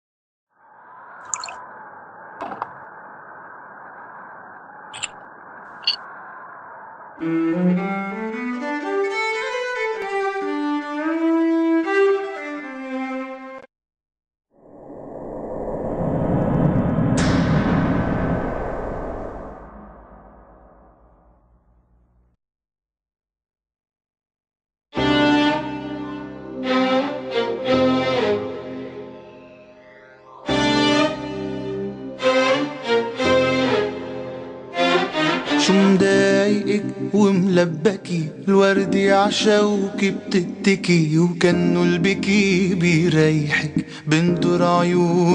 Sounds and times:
Violin, fiddle: 7.6s - 13.6s, 25.0s - 29.0s, 30.6s - 36.5s.

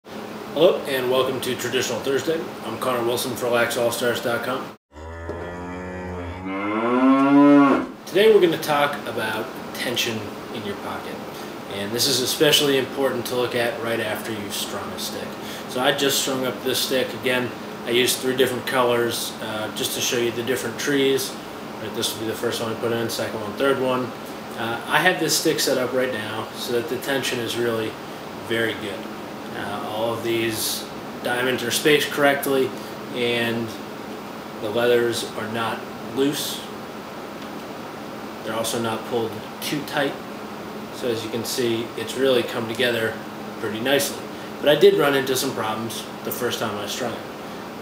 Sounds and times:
Speech: 0.5s - 4.7s, 8.1s - 33.8s, 34.6s - 36.8s, 38.4s - 40.2s, 40.9s - 47.3s.

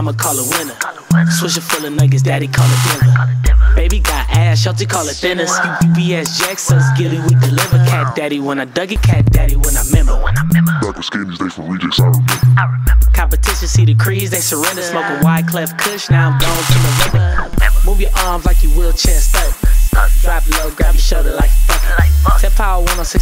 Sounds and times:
Music: 0.0s - 23.2s.

